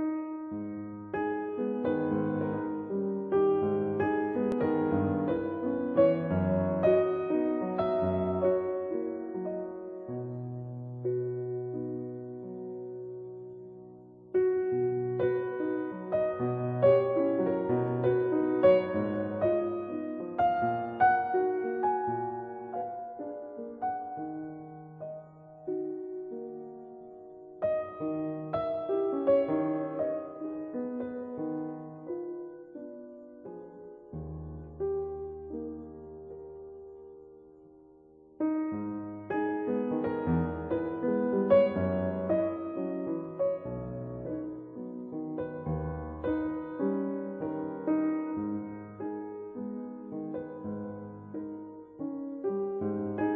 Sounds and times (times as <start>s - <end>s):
Music: 0.0s - 53.3s.